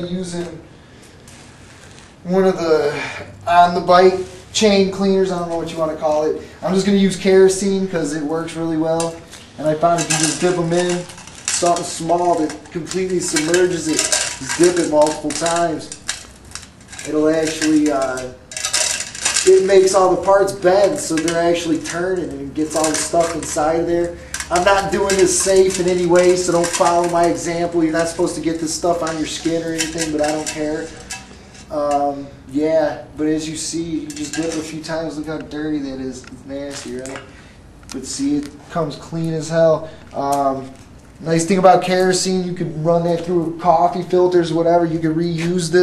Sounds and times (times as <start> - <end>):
Speech: 0.0 - 0.6, 2.2 - 16.0, 17.0 - 18.4, 19.4 - 31.0, 31.7 - 37.2, 37.9 - 45.8.